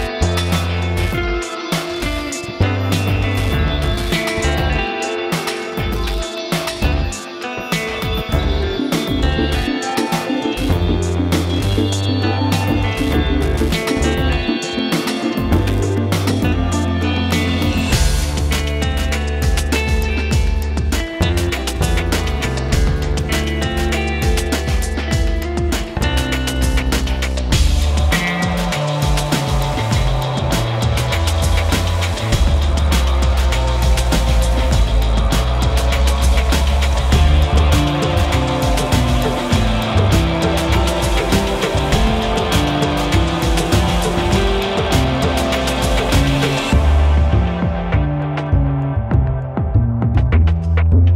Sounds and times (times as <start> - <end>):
Music: 0.0 - 51.1.